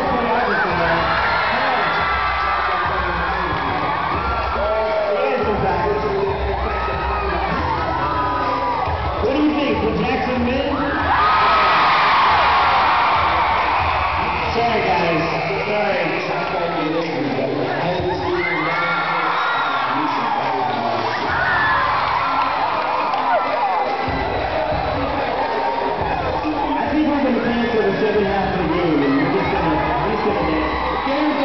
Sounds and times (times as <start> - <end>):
Speech: 0.0 - 2.1, 4.6 - 6.8, 9.2 - 11.0, 14.5 - 21.3, 26.0 - 31.4
Crowd: 0.0 - 31.4.